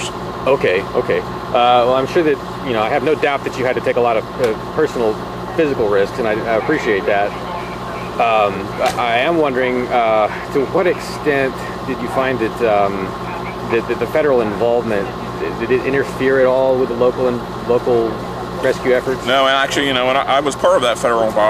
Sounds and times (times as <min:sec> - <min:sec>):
Speech: 0:00.0 - 0:21.4.